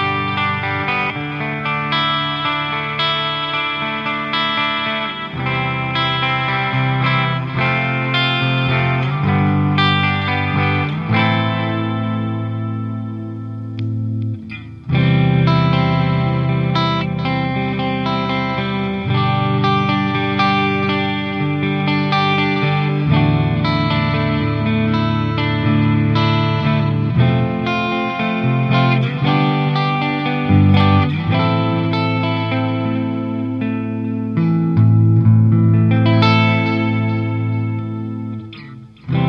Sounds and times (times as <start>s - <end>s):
Music: 0.0s - 39.2s.